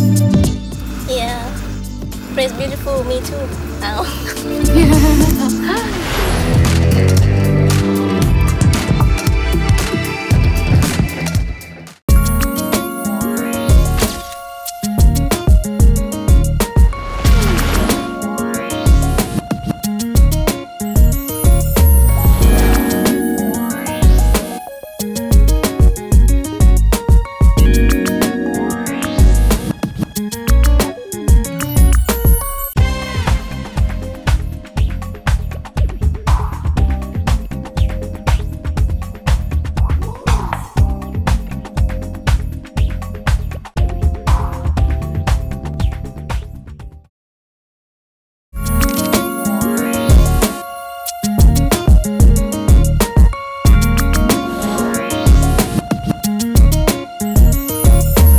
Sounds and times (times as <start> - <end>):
Music: 0.0 - 47.1, 48.6 - 58.3.